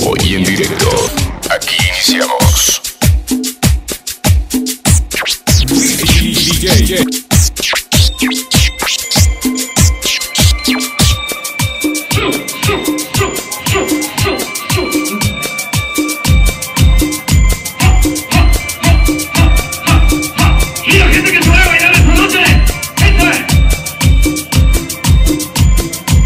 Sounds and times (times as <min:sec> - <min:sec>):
Speech: 0:00.0 - 0:02.8, 0:06.0 - 0:07.1, 0:20.4 - 0:23.5
Music: 0:00.0 - 0:26.2.